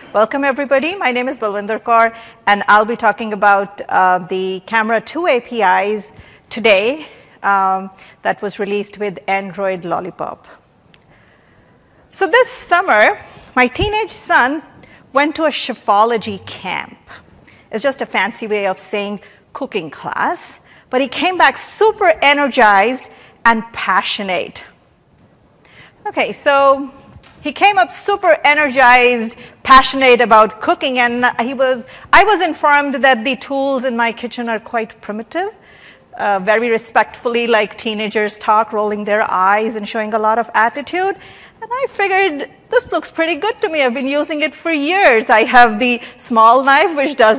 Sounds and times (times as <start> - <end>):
Speech: 0.2 - 10.6, 12.2 - 17.0, 17.8 - 24.7, 26.1 - 35.6, 36.2 - 47.3.